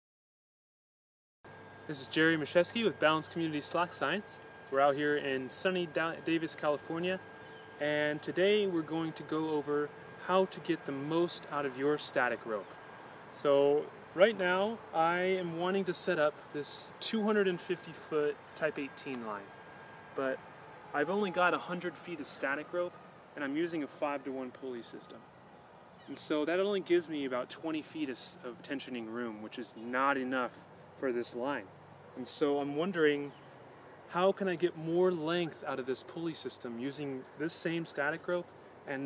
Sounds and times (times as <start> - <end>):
Speech: 1.9 - 7.2, 7.8 - 12.7, 13.4 - 19.5, 20.2 - 20.4, 21.0 - 25.2, 26.1 - 33.4, 34.1 - 39.0.